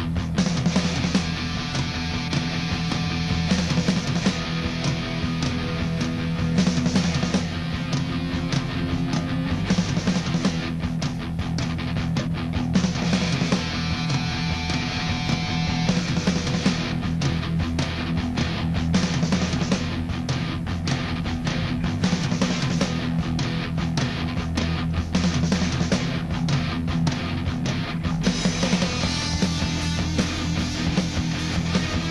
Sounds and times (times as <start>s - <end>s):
Music: 0.0s - 32.1s.